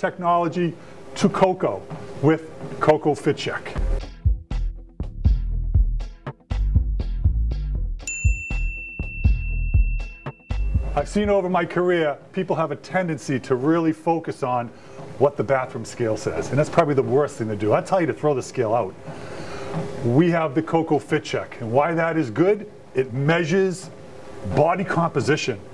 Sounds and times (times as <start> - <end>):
Speech: 0.0 - 3.8, 11.0 - 19.0, 20.0 - 25.7
Music: 1.8 - 20.1.